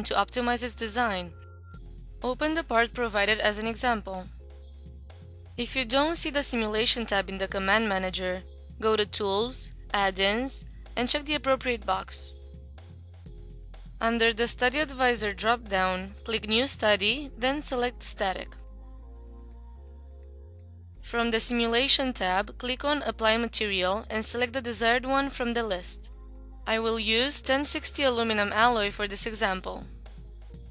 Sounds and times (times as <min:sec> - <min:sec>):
Speech: 0:00.0 - 0:01.4, 0:02.2 - 0:04.3, 0:05.6 - 0:12.3, 0:14.0 - 0:18.6, 0:21.1 - 0:26.1, 0:26.7 - 0:29.9
Music: 0:00.0 - 0:30.7.